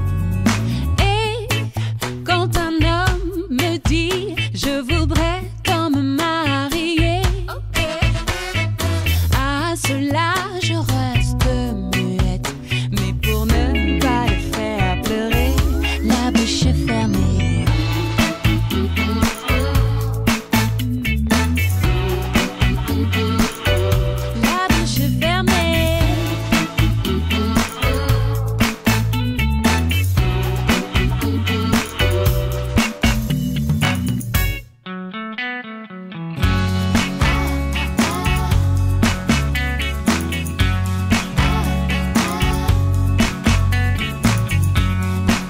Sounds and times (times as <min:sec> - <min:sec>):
Pop music: 0:00.0 - 0:34.6, 0:36.4 - 0:45.4.